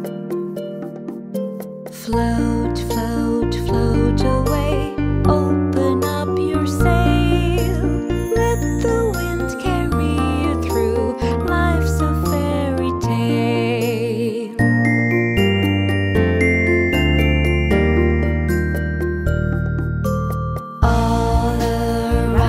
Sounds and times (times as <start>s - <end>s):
Music: 0.0s - 22.4s.